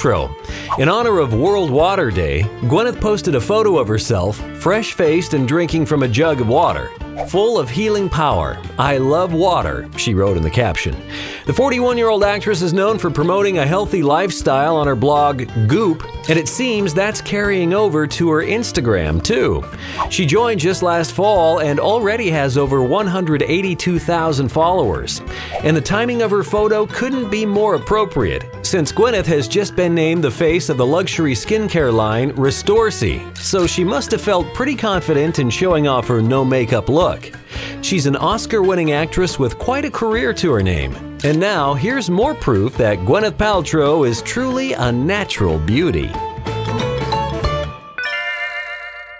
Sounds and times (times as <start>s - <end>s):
Speech: 0.0s - 46.2s
Music: 0.0s - 49.1s.